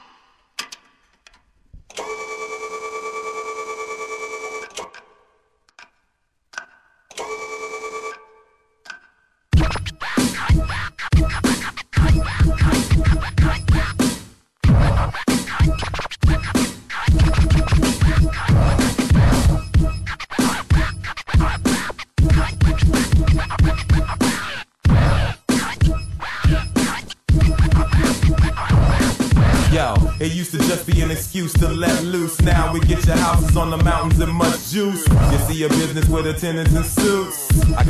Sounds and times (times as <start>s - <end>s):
Scratching (performance technique): 9.5s - 37.9s.